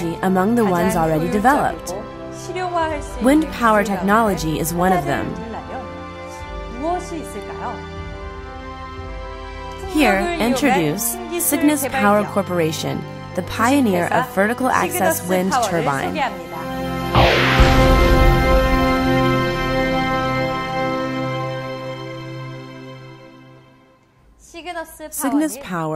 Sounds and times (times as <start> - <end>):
Speech: 0.0 - 5.9, 6.7 - 7.8, 9.8 - 16.7, 24.4 - 25.9
Music: 0.0 - 25.9.